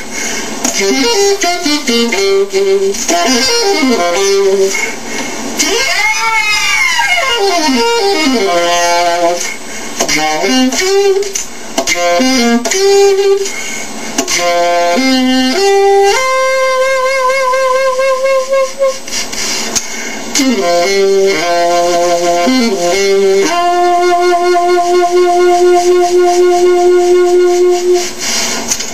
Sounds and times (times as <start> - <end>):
Saxophone: 0.0 - 28.9
Brass instrument: 0.6 - 5.0, 5.6 - 19.2, 20.3 - 28.6.